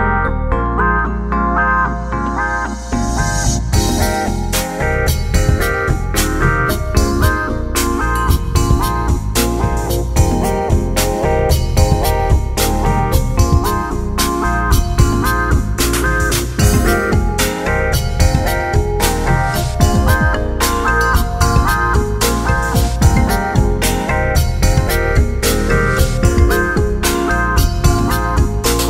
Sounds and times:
Music: 0.0s - 28.9s.

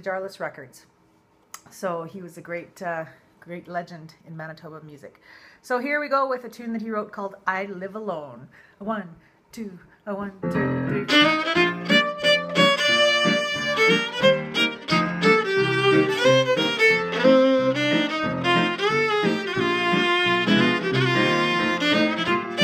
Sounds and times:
Speech: 0.0s - 0.9s, 1.6s - 11.1s
Violin, fiddle: 11.1s - 22.6s.

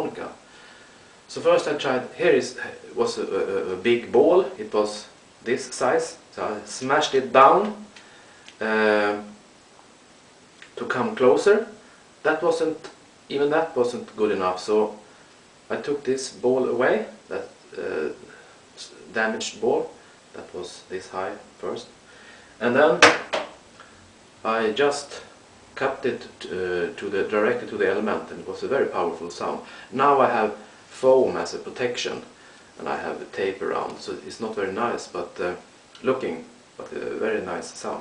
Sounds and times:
Speech: 0.0s - 0.4s, 1.3s - 7.9s, 8.6s - 9.4s, 10.7s - 15.0s, 15.7s - 22.0s, 22.6s - 23.2s, 24.4s - 38.0s.

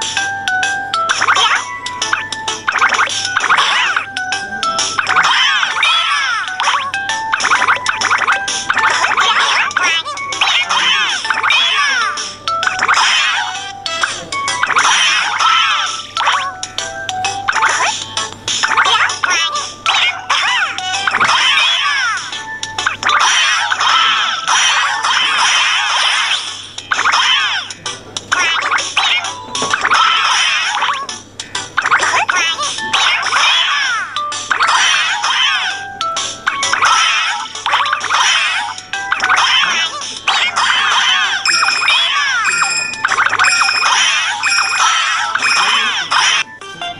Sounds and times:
Music: 0.0s - 47.0s.

